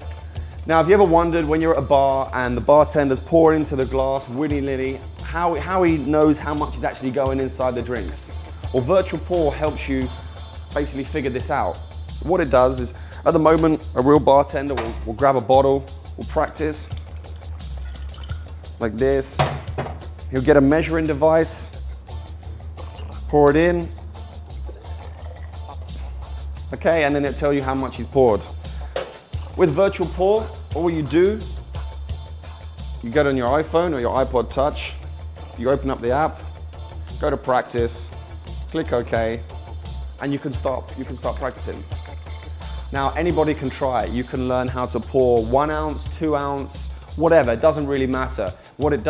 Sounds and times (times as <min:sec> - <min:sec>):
Music: 0:00.0 - 0:49.0
Speech: 0:00.7 - 0:10.2, 0:10.8 - 0:16.9, 0:18.8 - 0:19.4, 0:20.3 - 0:21.7, 0:23.3 - 0:24.0, 0:26.7 - 0:28.5, 0:29.6 - 0:31.5, 0:33.0 - 0:35.0, 0:35.6 - 0:36.4, 0:37.2 - 0:38.1, 0:38.7 - 0:39.5, 0:40.2 - 0:41.8, 0:42.9 - 0:49.0.